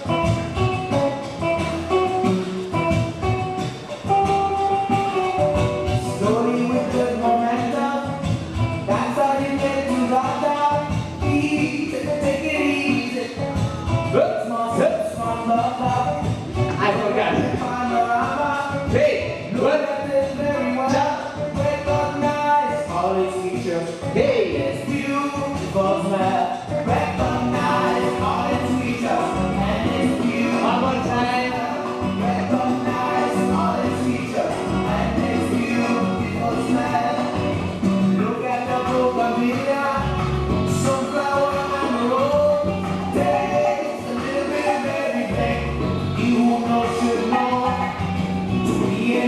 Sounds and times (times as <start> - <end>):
Salsa music: 0.0 - 49.2.